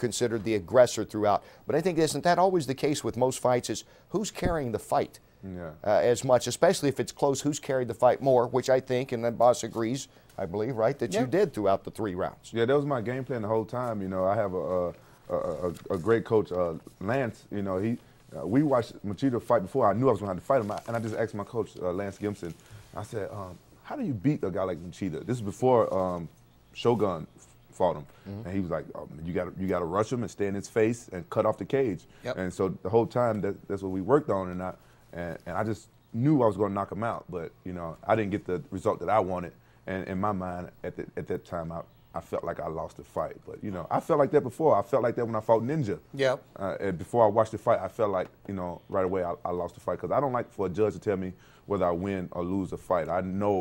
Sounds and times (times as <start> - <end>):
Speech: 0.0 - 53.6.